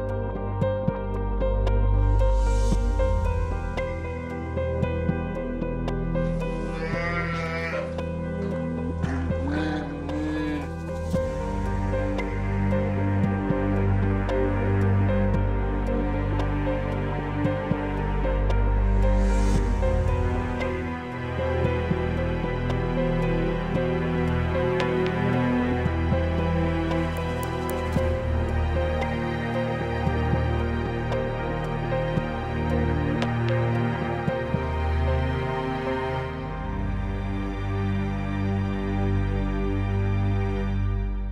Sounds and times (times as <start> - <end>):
Music: 0.0 - 41.3.